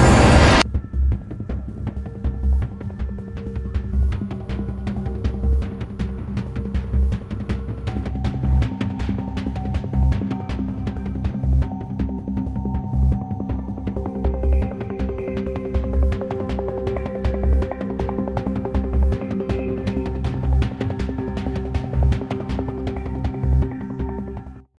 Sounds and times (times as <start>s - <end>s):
Music: 0.1s - 24.7s.